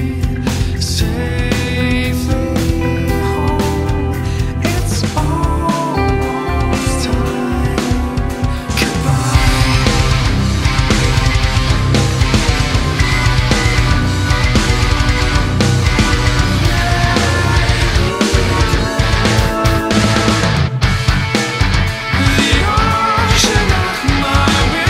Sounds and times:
Music: 0.0 - 24.8.

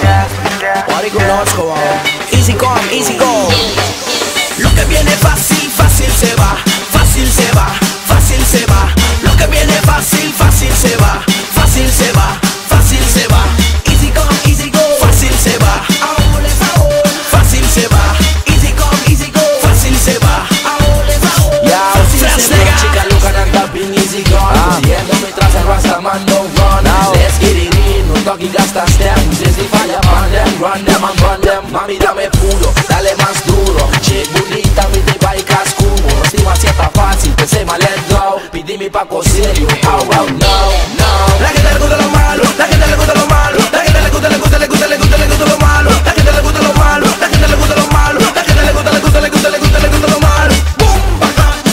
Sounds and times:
Exciting music: 0.0 - 51.7.

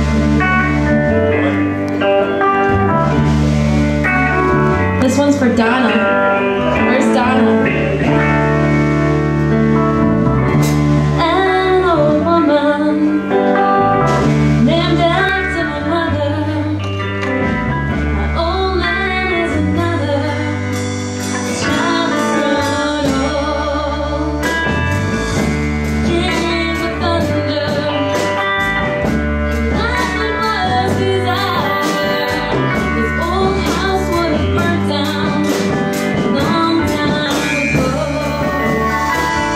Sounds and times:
Music: 0.0 - 39.5.

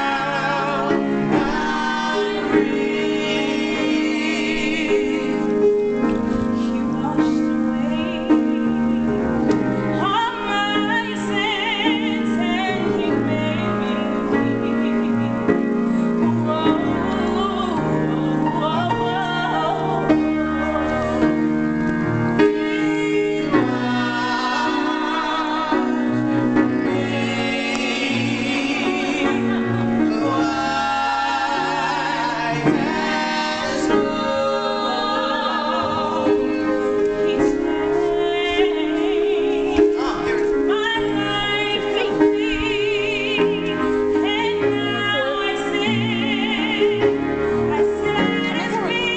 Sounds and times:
Choir: 0.0 - 6.0, 16.2 - 21.5, 22.4 - 49.1
Electronic organ: 0.0 - 49.1.

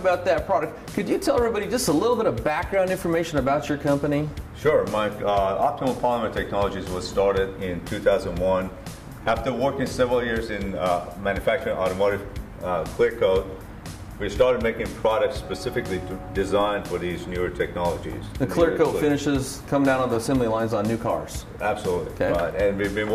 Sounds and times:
Speech: 0.0 - 8.7, 9.3 - 13.6, 14.2 - 23.1
Music: 0.0 - 23.1.

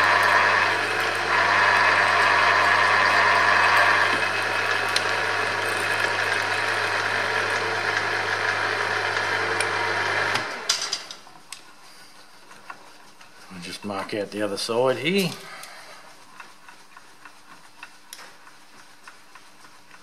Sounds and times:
Tools: 10.7 - 11.7
Speech: 13.5 - 15.5.

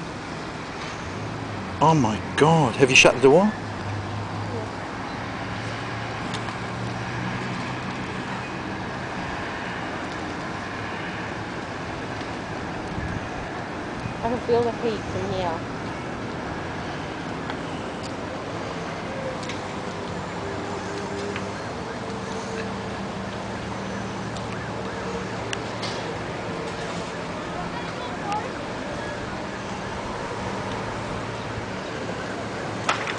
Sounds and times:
Vehicle: 0.0 - 33.1.

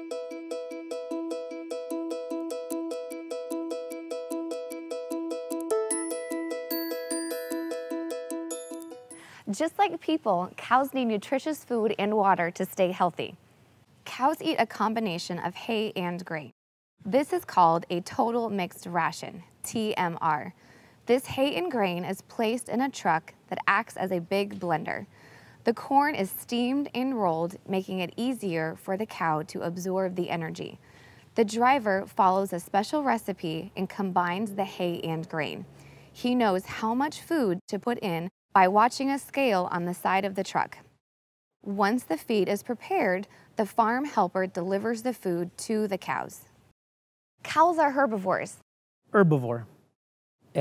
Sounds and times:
Speech: 9.5 - 13.4, 14.0 - 25.1, 25.7 - 30.8, 31.4 - 35.6, 36.2 - 40.8, 41.7 - 46.5, 47.5 - 48.6, 49.2 - 49.7.

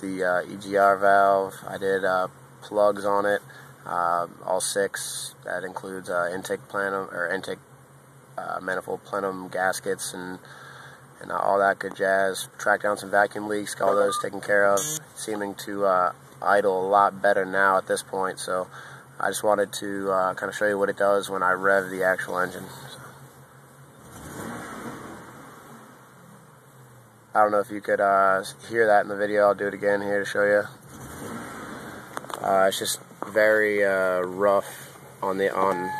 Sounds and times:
Speech: 0.0 - 7.6, 8.4 - 23.2, 27.4 - 30.8, 32.4 - 35.9
Car: 0.0 - 35.9
Accelerating, revving, vroom: 24.0 - 25.9, 30.9 - 32.1.

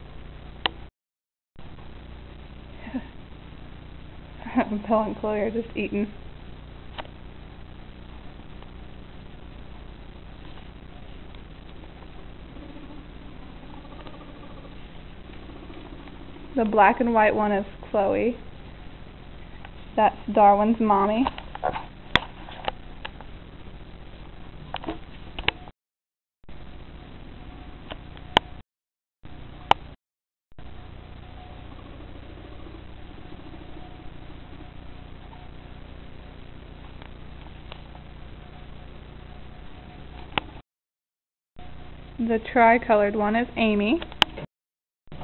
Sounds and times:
Speech: 4.4 - 6.2, 16.6 - 18.4, 20.0 - 21.3, 42.2 - 44.0.

